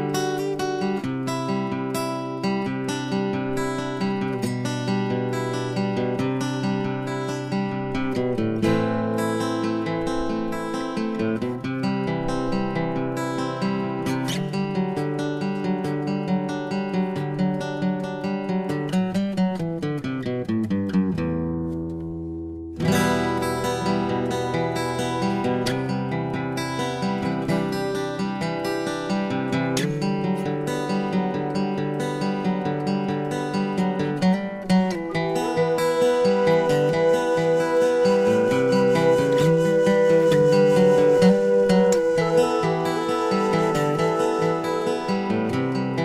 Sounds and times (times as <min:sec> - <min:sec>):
Music: 0:00.0 - 0:46.0.